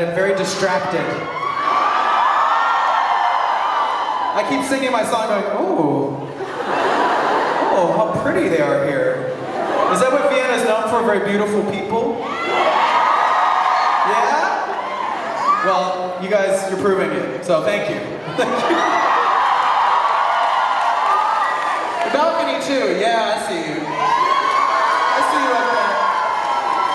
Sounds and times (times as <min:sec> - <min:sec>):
Male speech, man speaking: 0:00.0 - 0:01.3, 0:04.4 - 0:06.2, 0:07.7 - 0:09.3, 0:09.9 - 0:12.2, 0:14.1 - 0:14.6, 0:15.6 - 0:18.2, 0:22.1 - 0:23.9, 0:25.2 - 0:26.1
Crowd: 0:00.0 - 0:26.9.